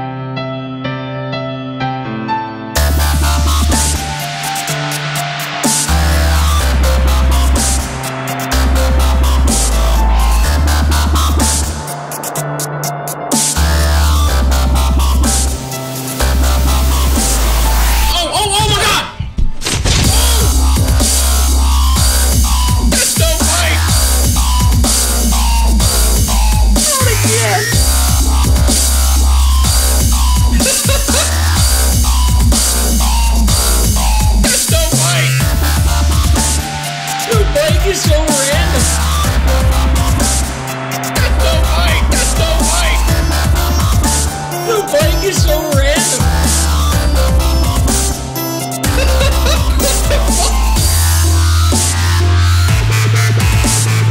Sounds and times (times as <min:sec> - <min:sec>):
Dubstep: 0:02.8 - 0:54.1
Speech: 0:18.1 - 0:19.2, 0:23.0 - 0:23.9, 0:26.8 - 0:27.8, 0:34.5 - 0:35.4, 0:37.3 - 0:38.9, 0:41.2 - 0:43.1, 0:44.7 - 0:46.2.